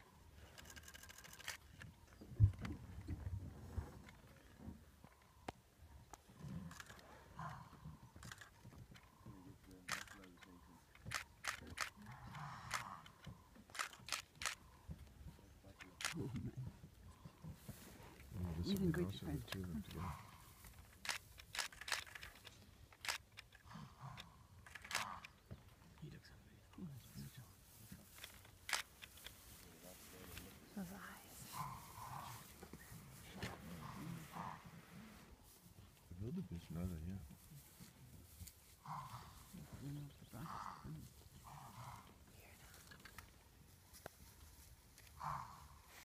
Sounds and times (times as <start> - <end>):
Roaring cats (lions, tigers): 6.2 - 19.2, 19.8 - 20.8, 23.6 - 25.5, 31.3 - 35.3, 38.8 - 43.2, 45.1 - 46.0
Speech: 36.2 - 37.3.